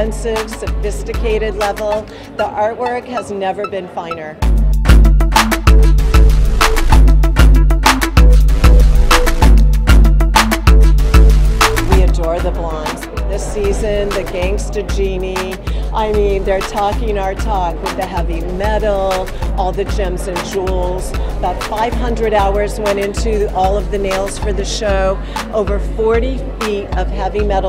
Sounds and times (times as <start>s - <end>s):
Speech: 0.0s - 4.4s, 11.9s - 27.6s
Music: 0.0s - 27.6s.